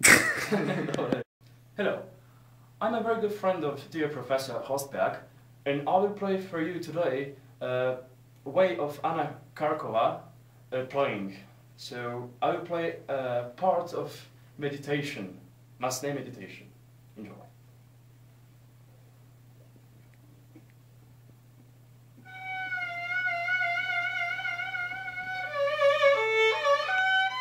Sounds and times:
Speech: 0:01.8 - 0:02.1, 0:02.8 - 0:17.6.

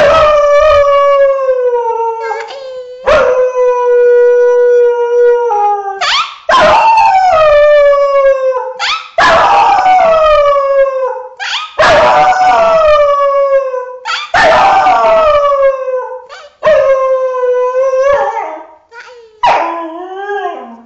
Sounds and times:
Howl: 0:00.0 - 0:18.6, 0:19.4 - 0:20.8
Yip: 0:06.0 - 0:06.8, 0:08.8 - 0:09.6, 0:11.4 - 0:12.2, 0:14.1 - 0:14.7.

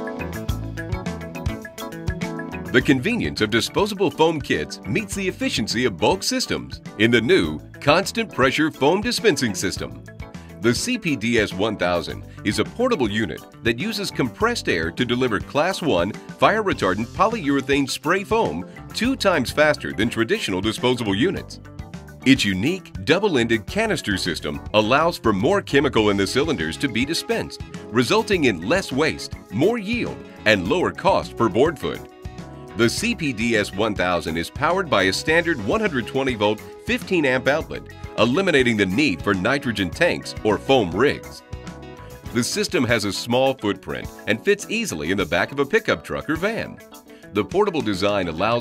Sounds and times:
Music: 0:00.0 - 0:48.6
Speech: 0:02.7 - 0:10.0, 0:10.6 - 0:21.6, 0:22.2 - 0:32.1, 0:32.8 - 0:41.4, 0:42.3 - 0:46.8, 0:47.4 - 0:48.6.

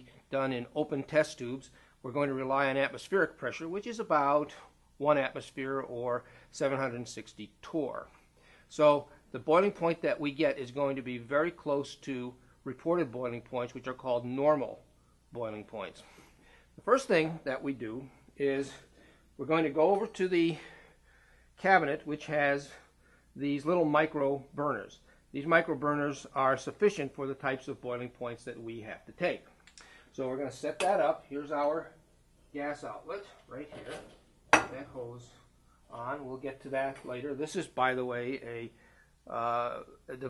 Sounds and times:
Speech: 0:00.0 - 0:08.1, 0:08.7 - 0:16.1, 0:16.8 - 0:20.7, 0:21.6 - 0:22.8, 0:23.4 - 0:29.5, 0:30.1 - 0:34.0, 0:34.6 - 0:40.2.

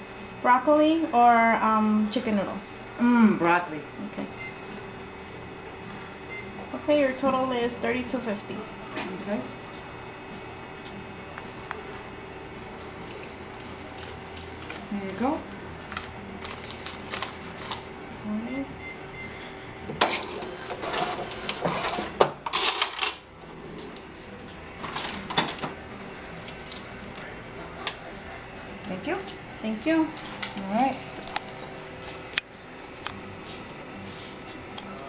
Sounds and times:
Speech: 0:14.9 - 0:15.5
Cash register: 0:20.0 - 0:23.3, 0:24.6 - 0:25.8.

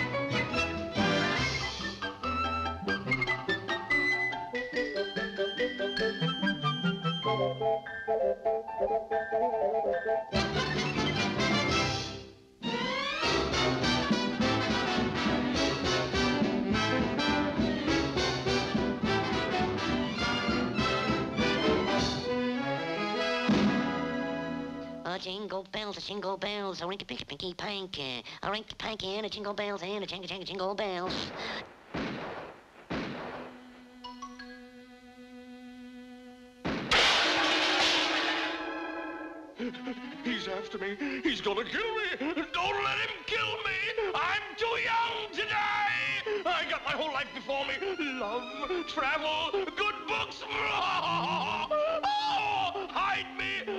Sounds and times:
Music: 0:00.0 - 0:25.2, 0:33.5 - 0:36.7, 0:39.4 - 0:53.7
Speech: 0:25.0 - 0:31.3, 0:40.2 - 0:53.7.

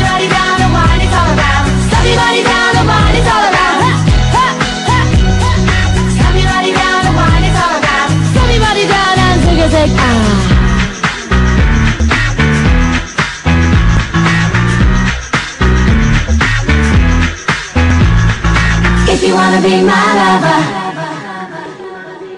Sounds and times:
Exciting music: 0:00.0 - 0:22.3.

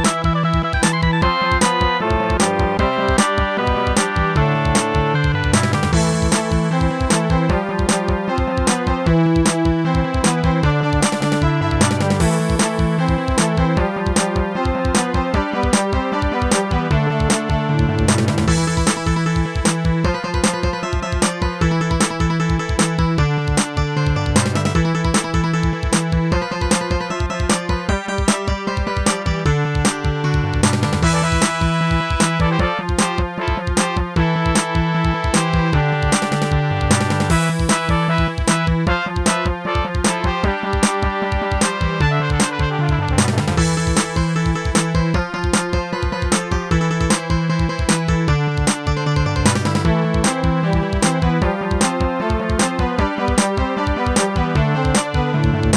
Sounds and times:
Music: 0:00.0 - 0:55.7.

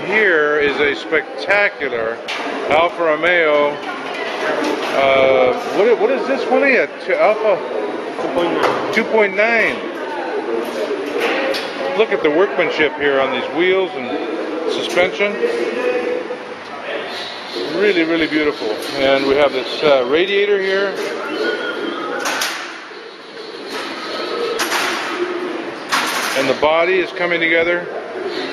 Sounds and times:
Speech: 0:00.0 - 0:03.8, 0:04.9 - 0:21.2, 0:26.4 - 0:27.9.

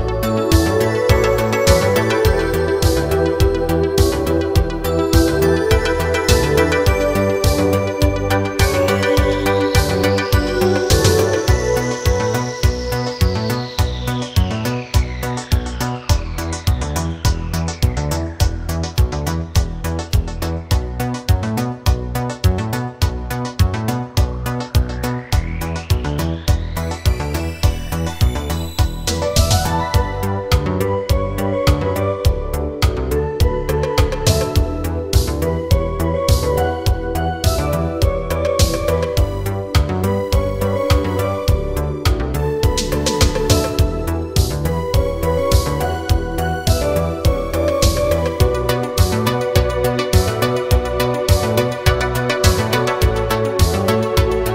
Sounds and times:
Music: 0:00.0 - 0:54.5.

